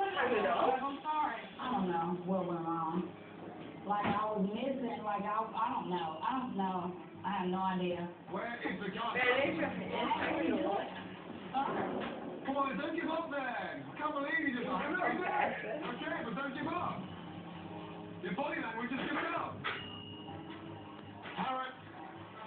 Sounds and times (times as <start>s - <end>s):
Inside, small room: 0.0s - 22.4s.